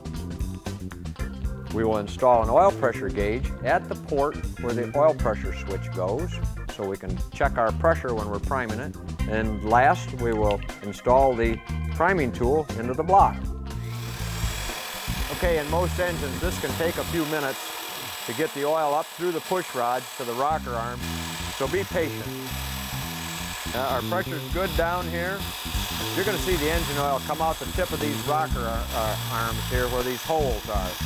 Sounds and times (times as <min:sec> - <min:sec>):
Engine: 0:13.8 - 0:24.5, 0:25.4 - 0:31.0.